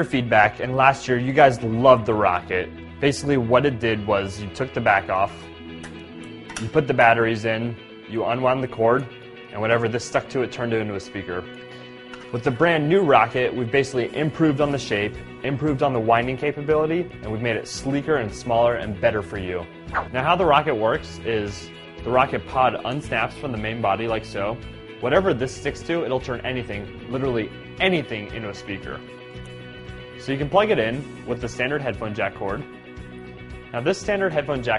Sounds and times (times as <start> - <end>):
Speech: 0.0 - 5.4, 6.6 - 11.5, 12.3 - 29.0, 30.2 - 32.6, 33.7 - 34.7
Music: 0.0 - 34.7.